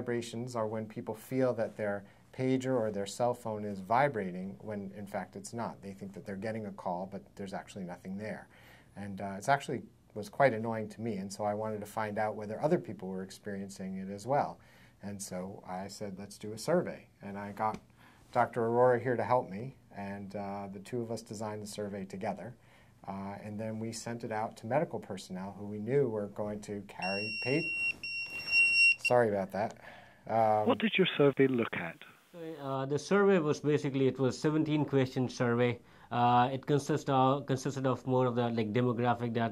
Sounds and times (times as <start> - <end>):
Speech: 0.0 - 27.7, 29.1 - 39.5
Inside, small room: 0.0 - 39.5
Smoke detector, smoke alarm: 27.0 - 29.1.